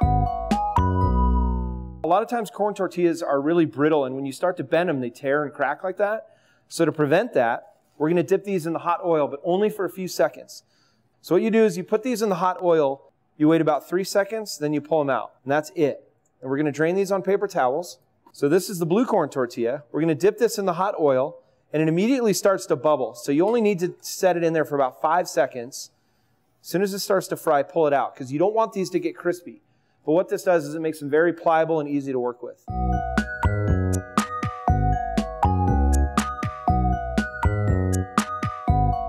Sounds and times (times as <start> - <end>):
Music: 0.0 - 2.1, 32.7 - 39.0
Speech: 2.1 - 25.9, 26.6 - 32.7.